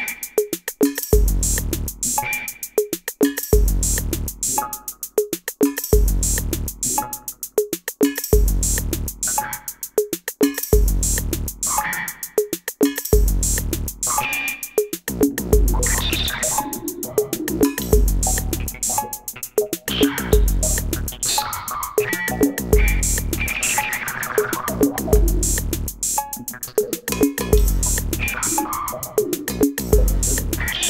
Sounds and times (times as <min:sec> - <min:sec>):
Drum: 0:00.0 - 0:30.8
Drum kit: 0:00.0 - 0:30.8.